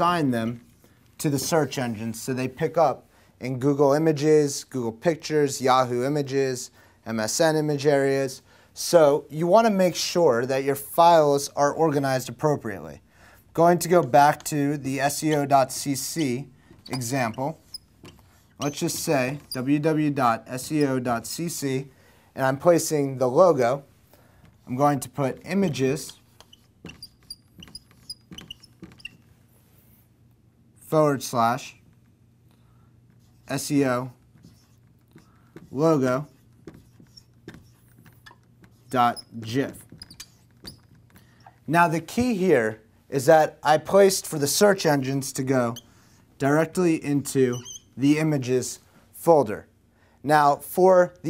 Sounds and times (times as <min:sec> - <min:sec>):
Speech: 0:00.0 - 0:13.0, 0:13.6 - 0:17.6, 0:18.6 - 0:23.9, 0:24.7 - 0:26.2, 0:30.8 - 0:31.8, 0:33.5 - 0:34.2, 0:35.7 - 0:36.4, 0:38.9 - 0:39.9, 0:41.7 - 0:45.8, 0:46.4 - 0:51.2.